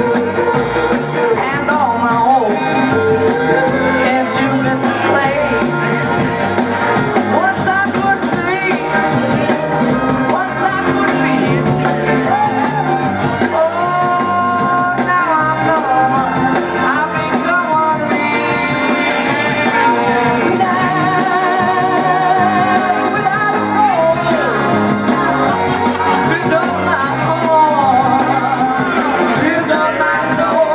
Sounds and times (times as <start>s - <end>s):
Music: 0.0s - 30.7s.